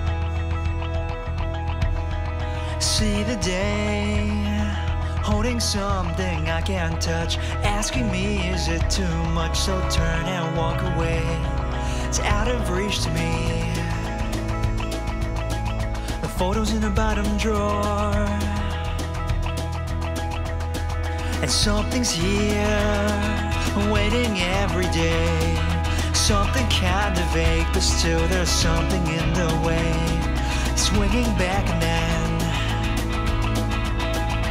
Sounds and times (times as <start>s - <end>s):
Music: 0.0s - 34.5s.